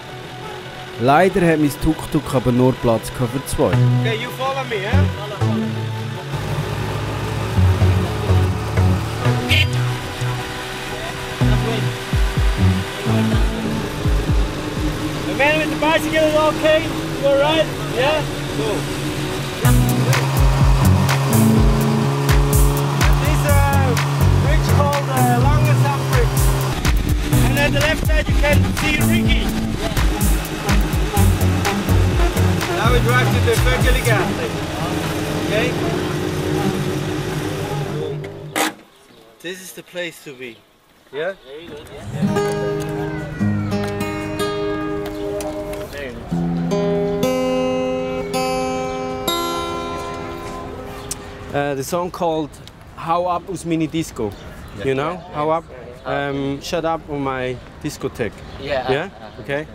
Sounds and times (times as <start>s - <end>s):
Music: 0.0s - 16.5s, 19.5s - 34.6s, 42.1s - 51.4s.